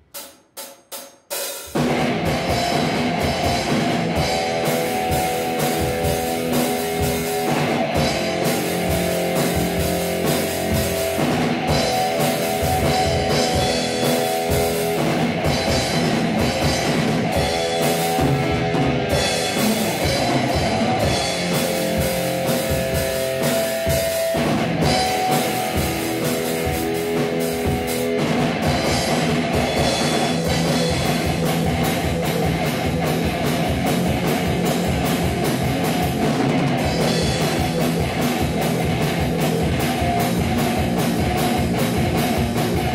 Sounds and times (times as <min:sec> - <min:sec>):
Drum kit: 0:00.0 - 0:42.9
Bass drum: 0:01.7 - 0:42.9.